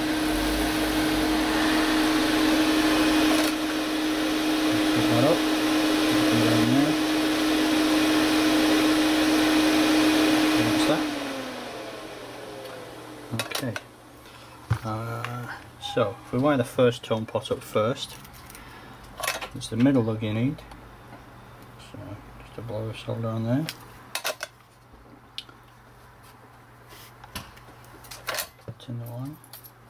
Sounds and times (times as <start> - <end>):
Speech: 13.3 - 13.8, 14.8 - 18.2, 19.5 - 20.7, 21.8 - 23.7, 28.7 - 29.4.